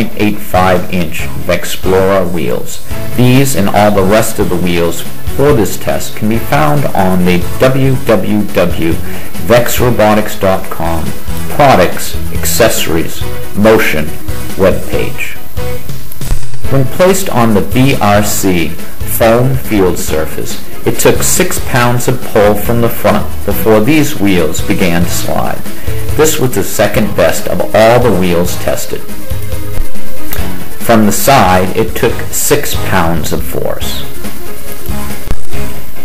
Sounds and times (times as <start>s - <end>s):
Speech: 0.0s - 15.4s, 16.7s - 29.1s, 30.8s - 34.1s
Music: 0.0s - 36.0s.